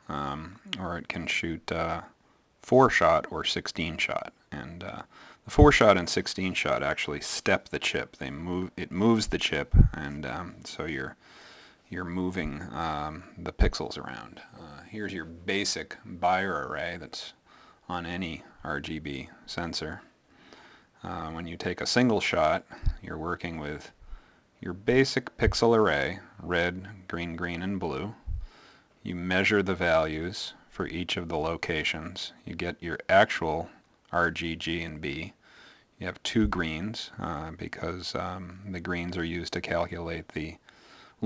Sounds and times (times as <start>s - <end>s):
Speech: 0.0s - 11.2s, 11.9s - 20.1s, 21.0s - 24.0s, 24.6s - 28.4s, 29.0s - 35.4s, 36.0s - 40.6s.